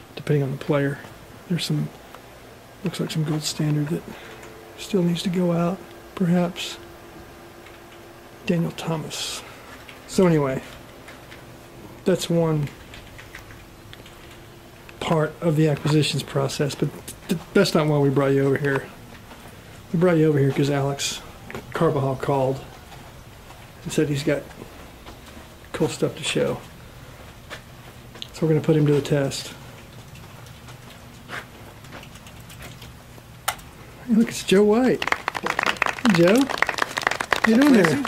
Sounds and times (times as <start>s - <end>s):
Speech: 0.2s - 2.0s, 2.8s - 4.2s, 4.8s - 6.8s, 8.4s - 9.5s, 10.1s - 10.8s, 12.0s - 12.8s, 15.0s - 19.0s, 19.9s - 22.7s, 23.8s - 24.6s, 25.7s - 26.7s, 28.3s - 29.6s, 34.0s - 36.6s, 37.4s - 38.0s.